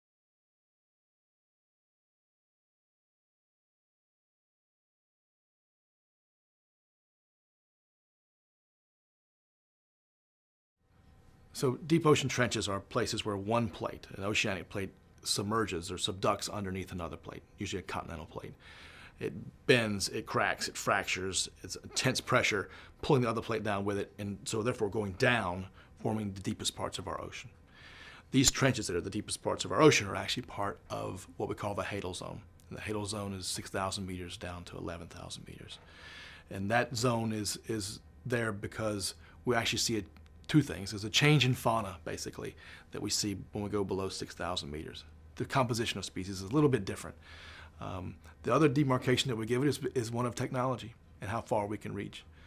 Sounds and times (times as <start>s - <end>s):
Speech: 11.5s - 18.6s, 19.2s - 27.5s, 28.3s - 35.8s, 36.5s - 47.2s, 47.8s - 52.3s.